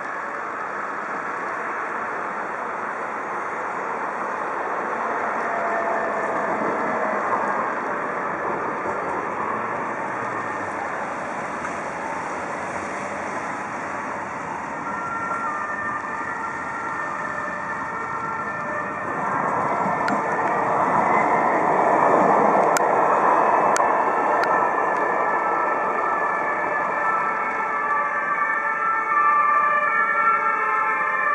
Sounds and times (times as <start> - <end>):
Vehicle: 0.0 - 31.3.